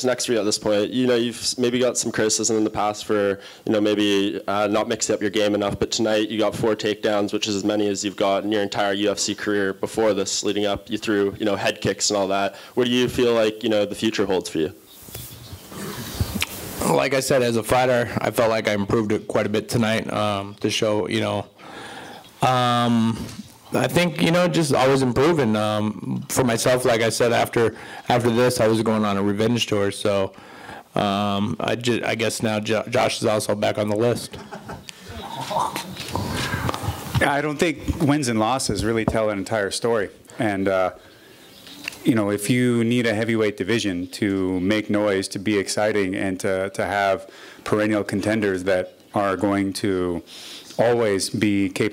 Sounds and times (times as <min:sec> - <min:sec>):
Speech: 0:00.0 - 0:14.8, 0:16.8 - 0:21.6, 0:22.4 - 0:30.4, 0:31.0 - 0:34.4, 0:37.2 - 0:41.0, 0:42.0 - 0:51.9.